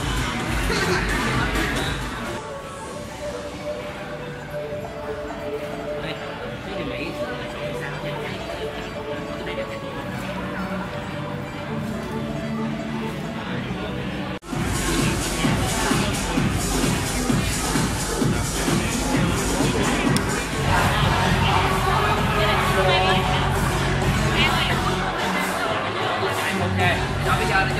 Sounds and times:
Music: 0.0s - 27.7s.

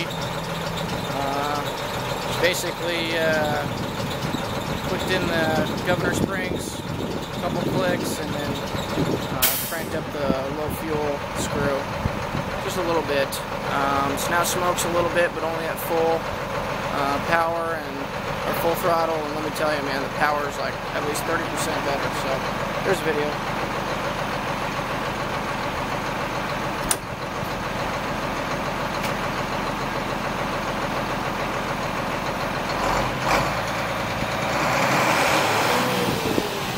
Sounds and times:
Speech: 1.2s - 3.8s, 4.8s - 12.0s, 12.6s - 16.3s, 16.9s - 23.4s.

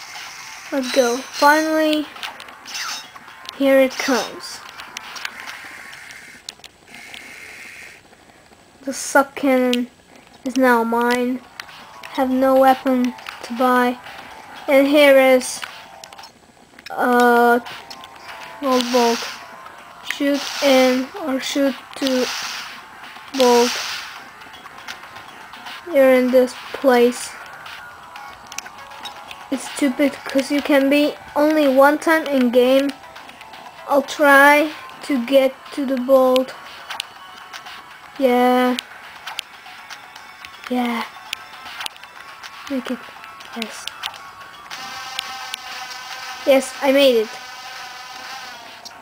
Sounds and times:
Music: 0.0s - 6.3s, 10.6s - 49.0s
Speech: 0.8s - 2.1s, 3.6s - 4.6s, 8.9s - 9.9s, 10.5s - 11.4s, 16.9s - 17.6s, 18.6s - 19.3s, 20.2s - 22.3s, 23.4s - 23.8s, 25.9s - 27.4s, 29.5s - 33.0s, 33.9s - 36.5s, 38.2s - 38.8s, 40.7s - 41.1s, 42.7s - 43.0s, 46.5s - 47.4s.

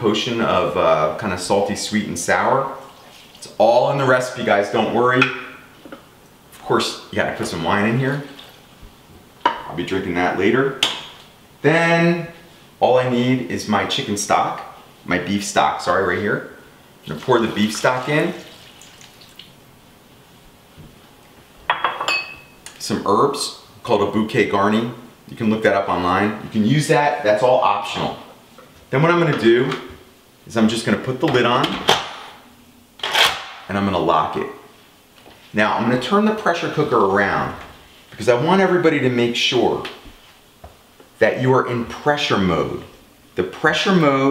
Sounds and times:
Speech: 0.0s - 5.5s, 6.6s - 8.4s, 9.6s - 10.8s, 11.6s - 18.5s, 22.7s - 31.9s, 33.7s - 34.7s, 35.5s - 40.1s, 41.2s - 44.3s
Inside, small room: 0.0s - 44.3s.

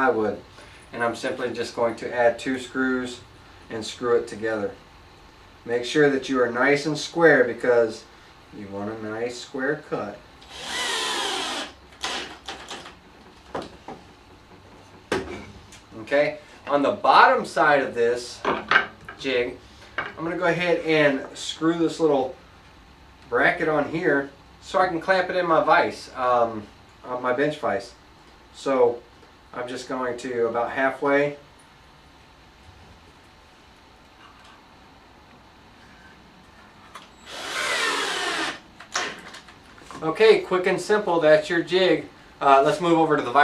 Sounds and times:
Speech: 0.0s - 4.8s, 5.7s - 10.2s, 15.9s - 18.5s, 19.2s - 19.6s, 20.2s - 22.4s, 23.3s - 28.0s, 28.6s - 31.4s, 39.9s - 43.4s.

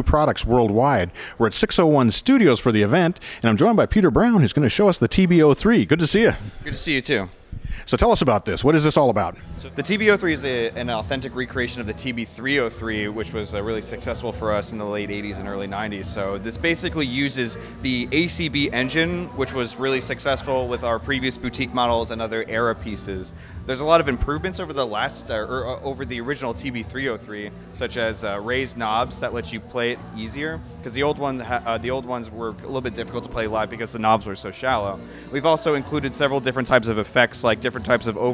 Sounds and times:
Speech: 0.0s - 7.3s, 7.9s - 38.3s
Music: 0.0s - 38.3s.

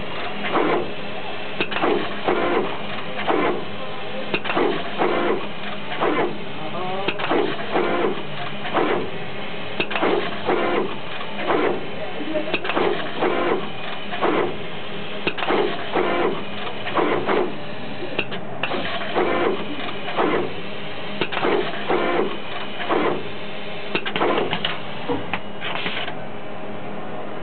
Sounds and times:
Printer: 0.0s - 26.5s.

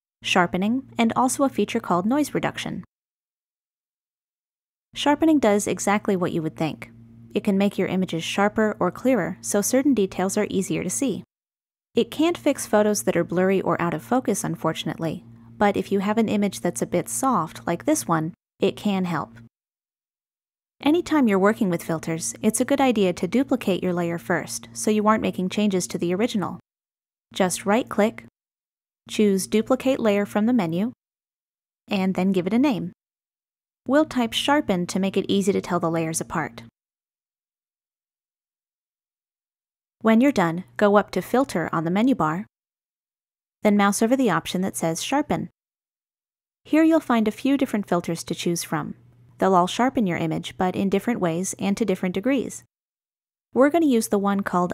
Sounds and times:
Speech: 0.2s - 2.9s, 5.0s - 11.3s, 12.0s - 19.5s, 20.8s - 26.6s, 27.4s - 28.3s, 29.1s - 31.0s, 31.9s - 33.0s, 33.9s - 36.7s, 40.0s - 42.5s, 43.7s - 45.5s, 46.7s - 52.7s, 53.6s - 54.7s.

